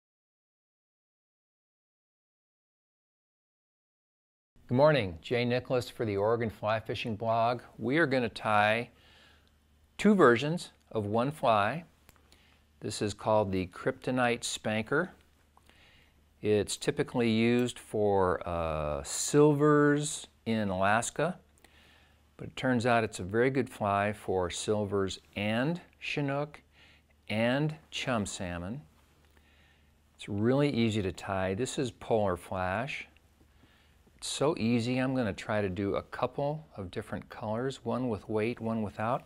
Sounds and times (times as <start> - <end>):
Speech: 4.7 - 9.0, 10.0 - 11.9, 12.8 - 15.2, 16.4 - 21.5, 22.4 - 28.9, 30.2 - 33.2, 34.2 - 39.2.